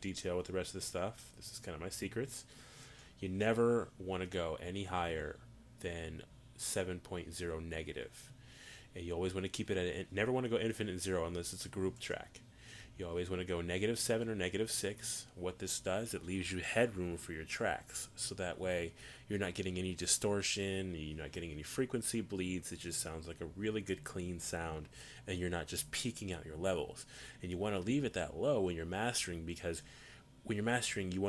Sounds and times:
Speech: 0:00.0 - 0:02.5, 0:03.2 - 0:08.3, 0:08.9 - 0:12.4, 0:13.0 - 0:29.8, 0:30.4 - 0:31.2.

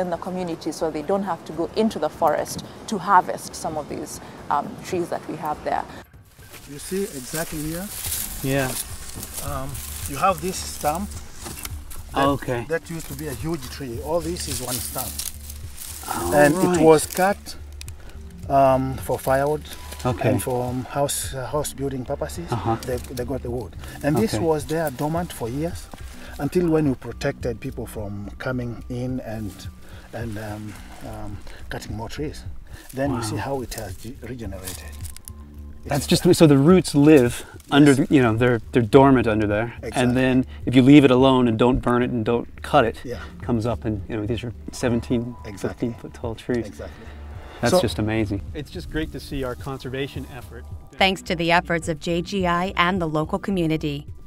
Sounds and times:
Outside, rural or natural: 0:00.0 - 0:51.6
Music: 0:00.0 - 0:54.2
Speech: 0:06.8 - 0:08.8, 0:12.2 - 0:15.1, 0:16.0 - 0:17.5, 0:18.5 - 0:25.8, 0:33.0 - 0:34.8, 0:35.9 - 0:46.9, 0:47.6 - 0:54.0.

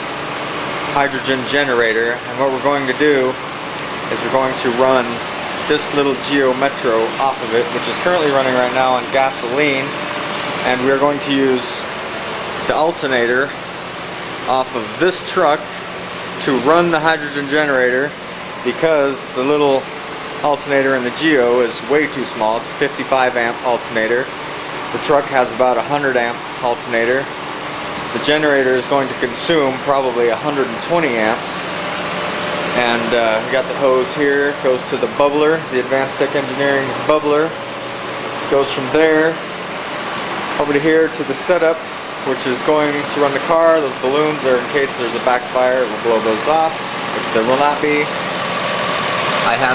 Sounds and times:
Speech: 0:00.9 - 0:03.4, 0:04.1 - 0:10.0, 0:10.6 - 0:11.9, 0:12.7 - 0:13.6, 0:14.5 - 0:15.8, 0:16.4 - 0:24.3, 0:25.0 - 0:27.3, 0:28.1 - 0:31.7, 0:32.7 - 0:37.6, 0:38.5 - 0:39.4, 0:40.6 - 0:48.2, 0:49.4 - 0:49.7.

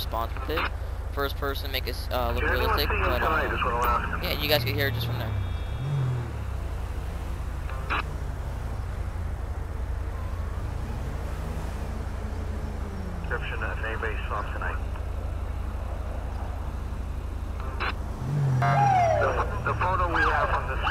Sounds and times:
Speech: 0:00.0 - 0:05.4, 0:13.3 - 0:15.0, 0:19.2 - 0:20.9
Car: 0:00.0 - 0:20.9.

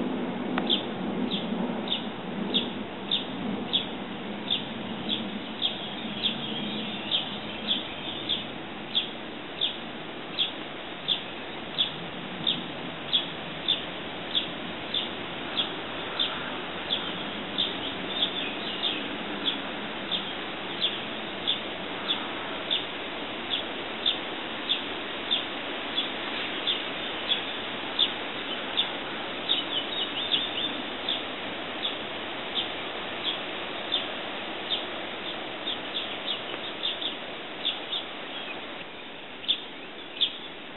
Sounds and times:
Bird: 0:00.6 - 0:22.9, 0:23.5 - 0:40.6.

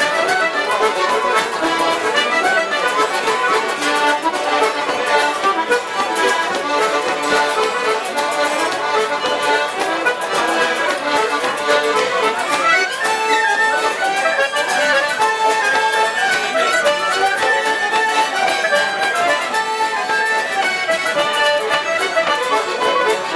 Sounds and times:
Music: 0:00.0 - 0:23.3.

